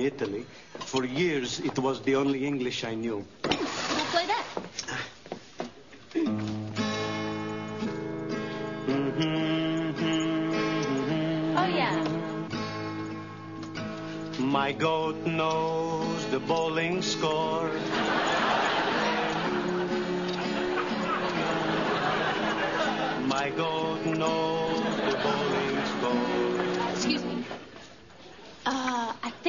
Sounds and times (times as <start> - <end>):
Music: 6.2 - 27.5.